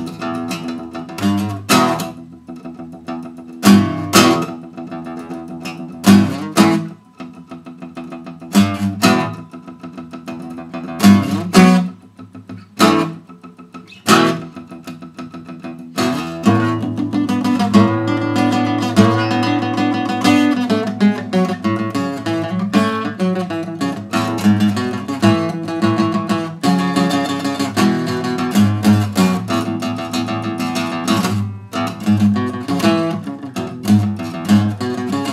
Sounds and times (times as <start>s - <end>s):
Strum: 0.0s - 35.3s.